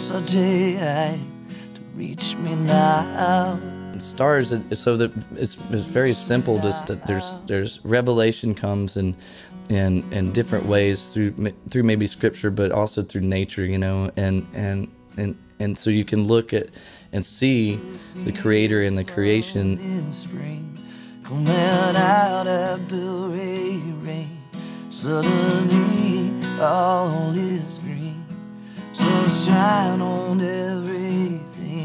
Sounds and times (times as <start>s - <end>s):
Music: 0.0s - 12.7s, 14.0s - 31.8s
Speech: 4.0s - 20.3s.